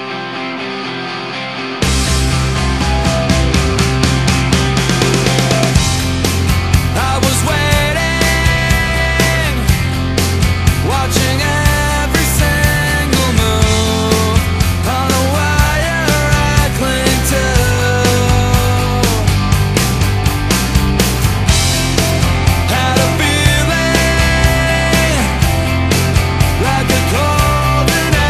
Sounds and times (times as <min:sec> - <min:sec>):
Grunge: 0:00.0 - 0:28.2.